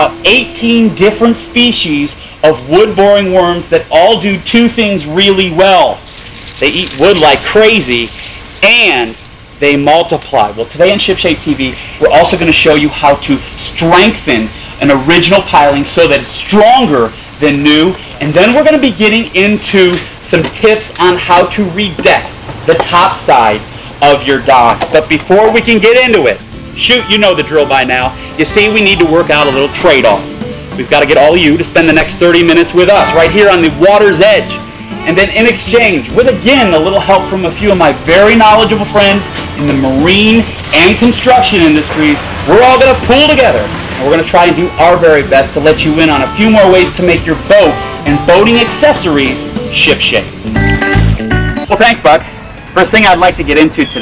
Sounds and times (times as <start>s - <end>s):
Speech: 0.0s - 6.0s, 6.6s - 30.2s, 30.8s - 50.3s, 51.7s - 54.0s.